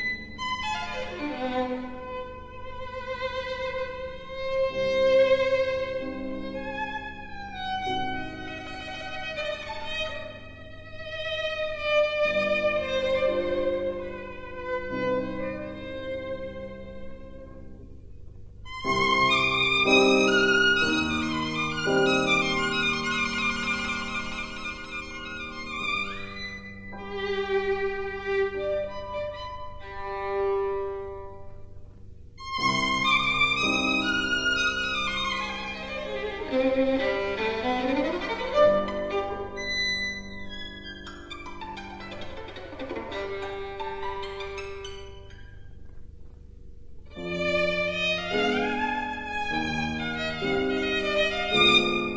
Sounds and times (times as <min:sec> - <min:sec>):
Violin, fiddle: 0:00.0 - 0:17.6, 0:18.7 - 0:31.6, 0:32.4 - 0:45.5, 0:47.1 - 0:52.1.